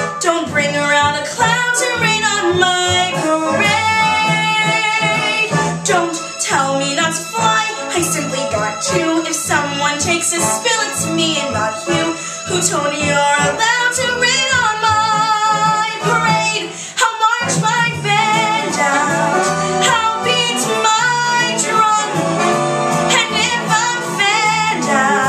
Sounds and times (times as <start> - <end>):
Music: 0.0 - 25.2
Female singing: 0.2 - 22.2, 23.1 - 25.2.